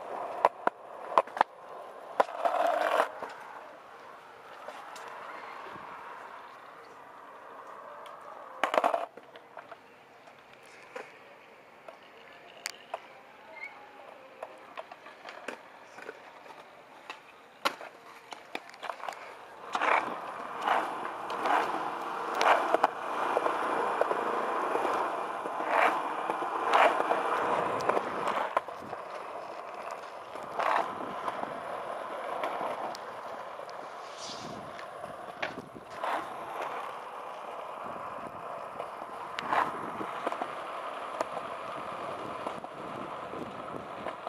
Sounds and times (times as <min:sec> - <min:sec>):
Skateboard: 0:00.0 - 0:44.2.